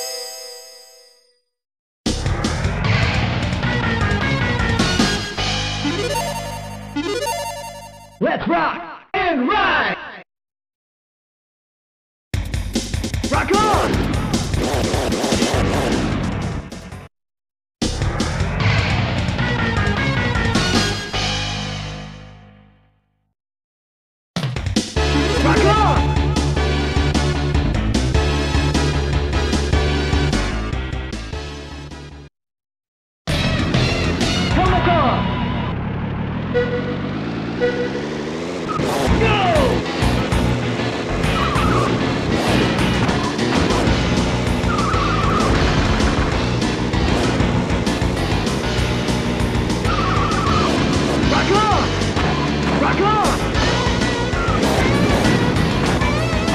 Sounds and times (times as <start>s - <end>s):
Music: 2.1s - 8.2s, 12.4s - 17.1s, 17.8s - 23.2s, 24.4s - 32.3s, 33.3s - 35.5s, 39.0s - 56.5s
Speech: 8.2s - 10.2s, 13.3s - 14.0s, 25.2s - 26.0s, 34.5s - 35.2s, 39.1s - 39.8s, 51.3s - 51.9s, 52.8s - 53.4s.